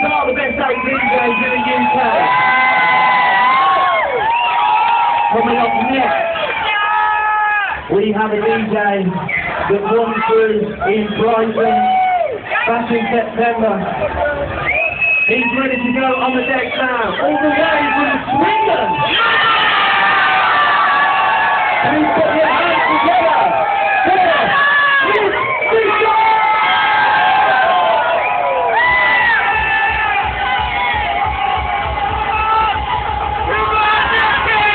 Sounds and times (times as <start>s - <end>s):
Crowd: 0.0s - 34.7s
Hubbub, speech noise, speech babble: 0.0s - 34.7s.